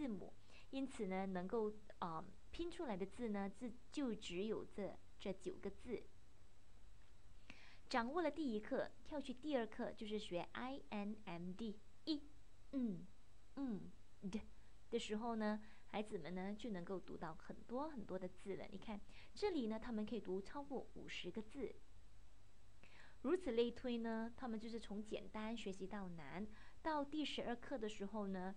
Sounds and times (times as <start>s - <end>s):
Speech: 0.0s - 6.1s, 7.9s - 21.8s, 23.2s - 28.5s.